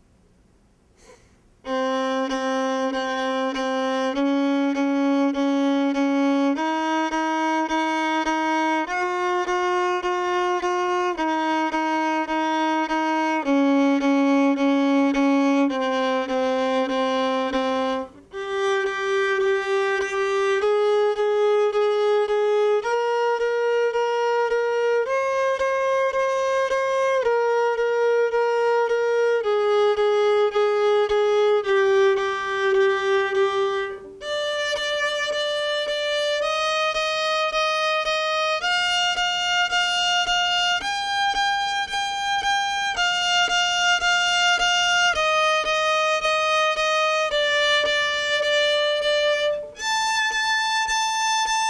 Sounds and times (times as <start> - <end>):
Violin, fiddle: 1.6 - 51.6.